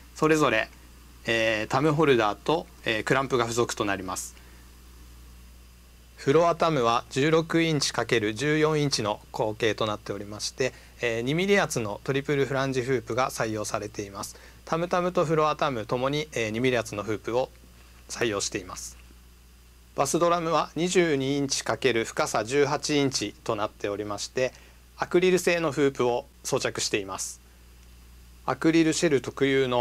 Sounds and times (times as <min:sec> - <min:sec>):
Speech: 0:00.2 - 0:04.4, 0:06.2 - 0:19.0, 0:20.0 - 0:27.4, 0:28.4 - 0:29.8.